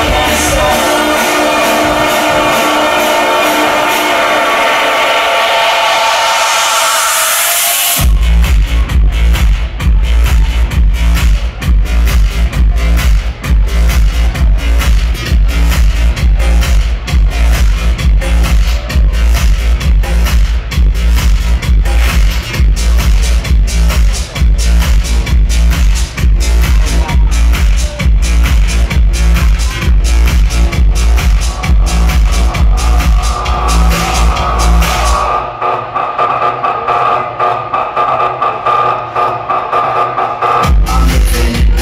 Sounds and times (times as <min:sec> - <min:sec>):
Techno: 0:00.0 - 0:41.8.